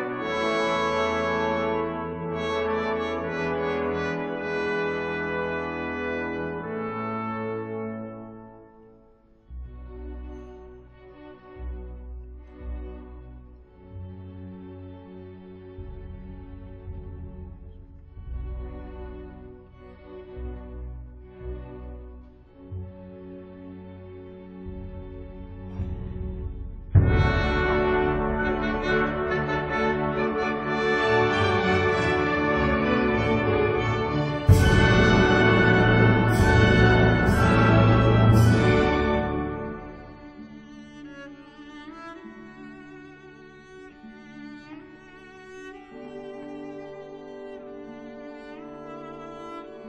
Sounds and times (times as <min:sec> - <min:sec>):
Cello: 0:00.0 - 0:49.8
Orchestra: 0:00.0 - 0:49.8.